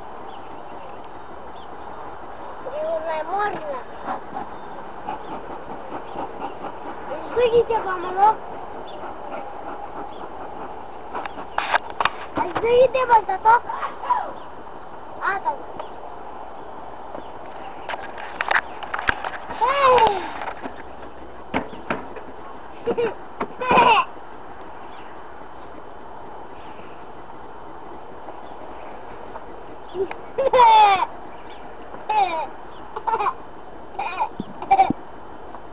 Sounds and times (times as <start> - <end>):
Bee, wasp, etc.: 0.0 - 35.7.